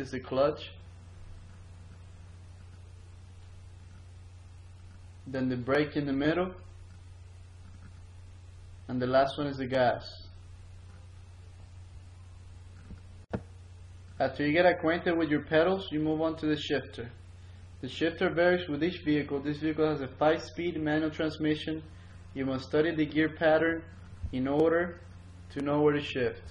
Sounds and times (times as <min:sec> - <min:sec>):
Speech: 0:00.0 - 0:00.8, 0:05.3 - 0:06.7, 0:08.9 - 0:10.4, 0:14.2 - 0:17.2, 0:17.8 - 0:26.5.